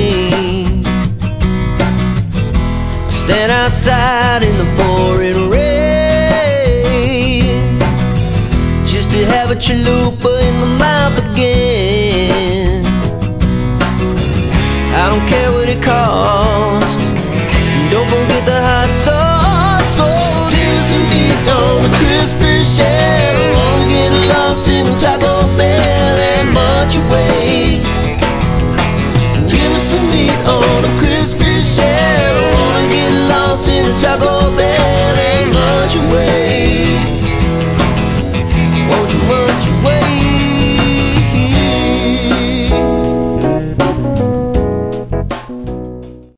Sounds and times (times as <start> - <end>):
Music: 0.0 - 46.3.